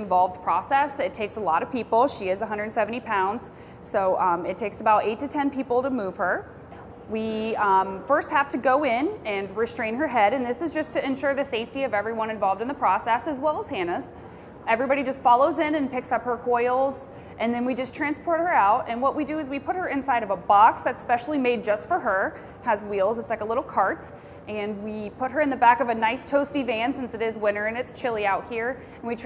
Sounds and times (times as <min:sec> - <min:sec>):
Speech: 0:00.0 - 0:06.5, 0:07.1 - 0:29.2.